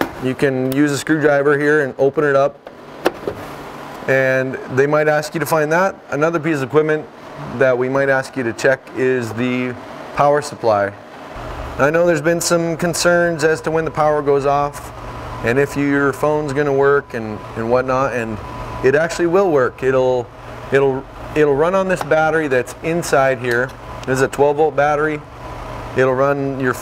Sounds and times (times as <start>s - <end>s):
Speech: 0.2s - 2.6s, 4.1s - 11.0s, 11.8s - 25.3s, 26.0s - 26.8s.